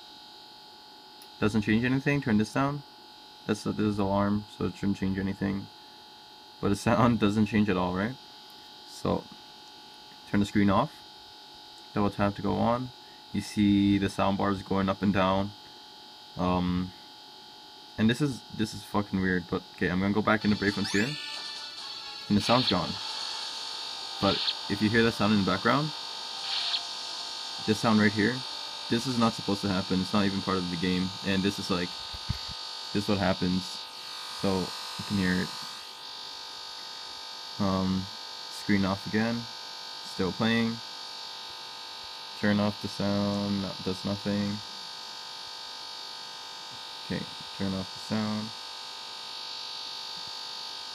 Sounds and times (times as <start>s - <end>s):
Hum: 0.0s - 39.5s.